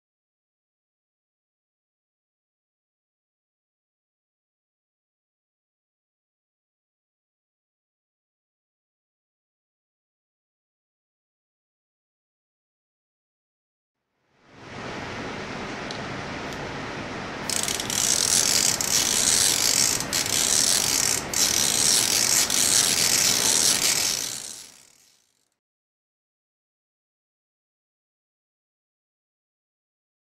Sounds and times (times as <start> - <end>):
Gears: 17.5 - 25.6
Ratchet, pawl: 17.5 - 25.6.